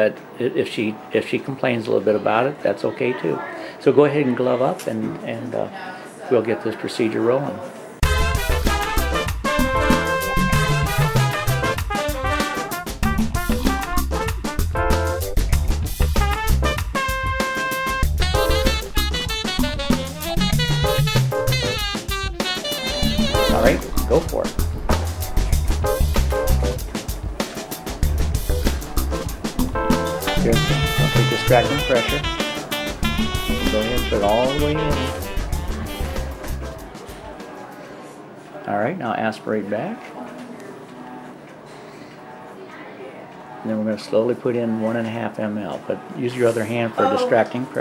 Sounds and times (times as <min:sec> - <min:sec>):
Music: 0:08.0 - 0:37.9
Speech: 0:23.4 - 0:24.5, 0:30.4 - 0:32.2, 0:33.6 - 0:35.2, 0:42.4 - 0:47.8.